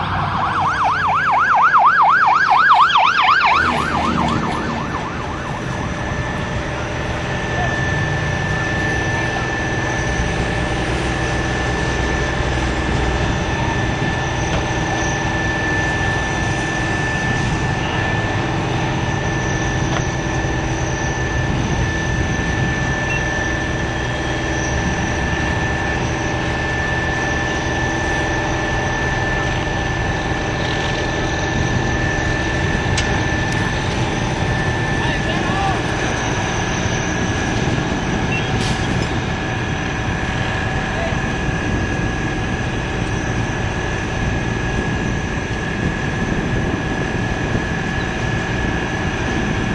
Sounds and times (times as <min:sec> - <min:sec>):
Vehicle: 0:00.0 - 0:49.7.